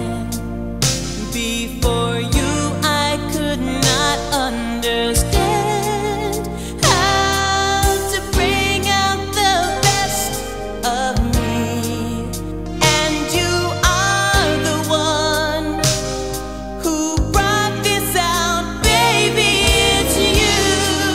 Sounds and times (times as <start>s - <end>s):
Rhythm and blues: 0.0s - 21.1s.